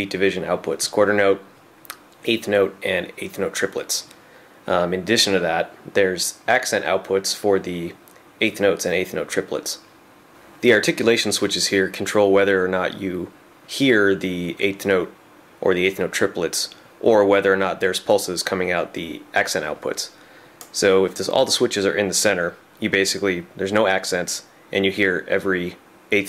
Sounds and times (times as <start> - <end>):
Speech: 0.0 - 9.9, 10.6 - 26.2.